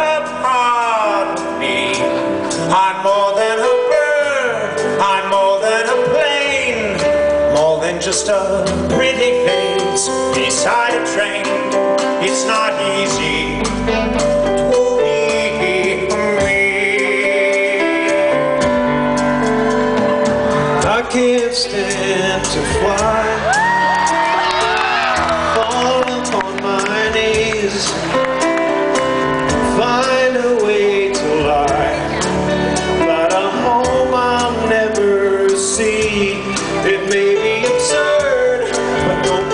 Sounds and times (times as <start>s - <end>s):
Male singing: 0.0s - 18.6s, 20.8s - 28.0s, 29.6s - 32.3s, 33.0s - 39.5s
Music: 0.0s - 39.5s.